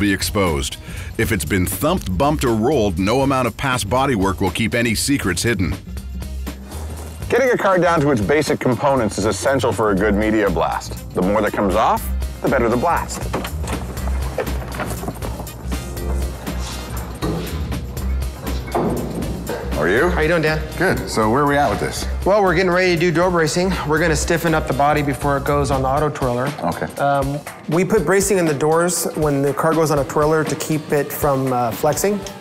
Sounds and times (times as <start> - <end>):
Music: 0.0 - 32.4.